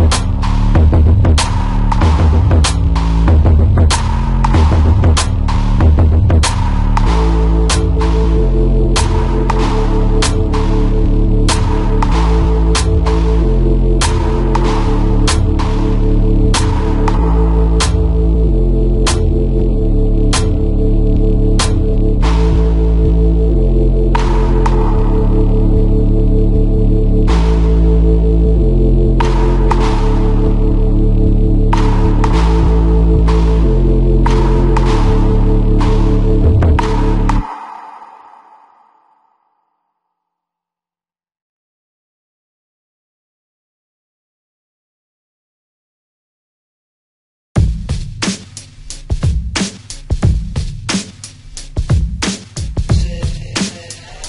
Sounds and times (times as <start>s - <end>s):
Electronica: 0.0s - 39.7s.